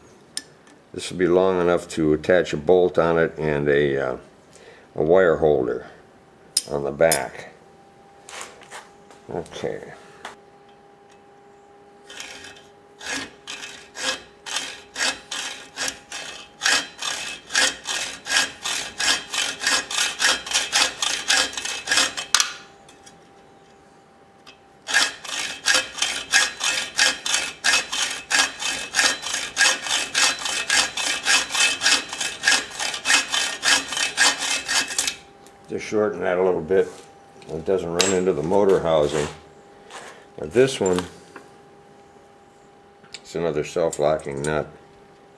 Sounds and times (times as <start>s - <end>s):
Sawing: 12.0s - 22.6s, 24.8s - 35.3s.